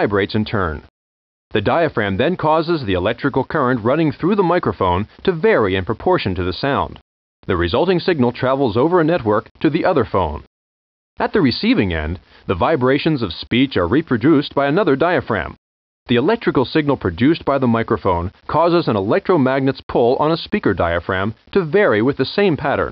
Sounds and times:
Speech: 0:00.0 - 0:00.9, 0:01.5 - 0:10.5, 0:11.2 - 0:22.9.

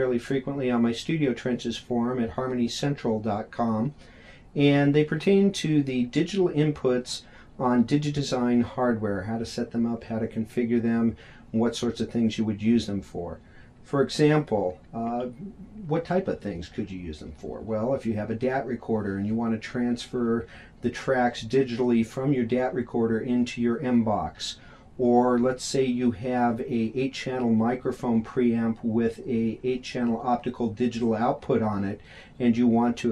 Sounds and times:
Speech: 0:00.0 - 0:04.0, 0:04.6 - 0:33.1.

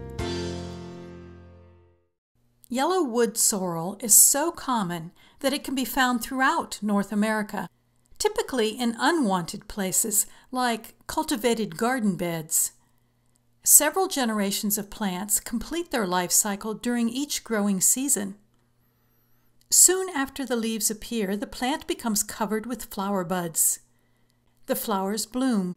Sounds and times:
Speech: 0:02.7 - 0:12.8, 0:13.6 - 0:18.4, 0:19.7 - 0:23.9, 0:24.7 - 0:25.7.

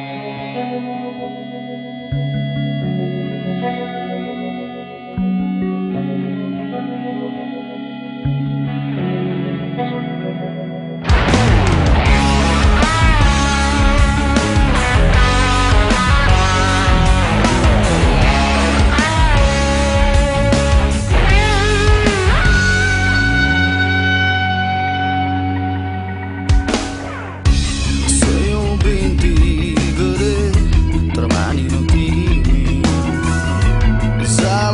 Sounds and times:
Rock and roll: 0:00.0 - 0:34.7
Punk rock: 0:11.0 - 0:34.7.

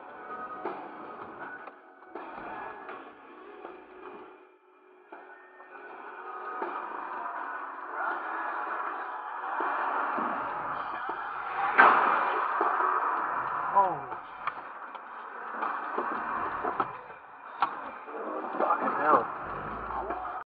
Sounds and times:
Music: 0:00.0 - 0:20.4
Speech: 0:13.7 - 0:14.2, 0:17.9 - 0:20.4.

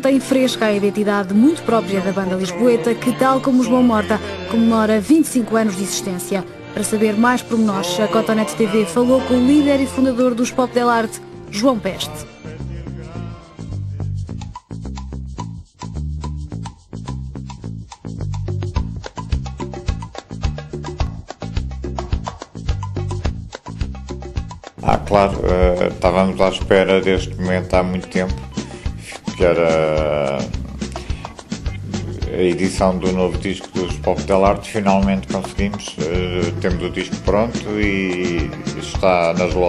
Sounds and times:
Speech: 0:00.0 - 0:12.3, 0:24.8 - 0:28.4, 0:29.3 - 0:30.5, 0:32.2 - 0:39.6
Music: 0:00.0 - 0:39.6.

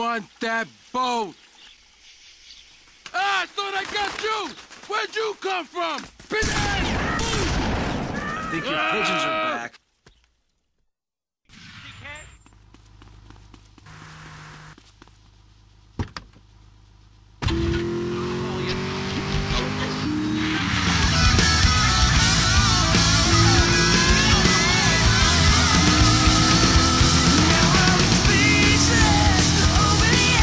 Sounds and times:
Speech: 0:00.0 - 0:01.4, 0:03.1 - 0:07.5, 0:08.2 - 0:09.8.

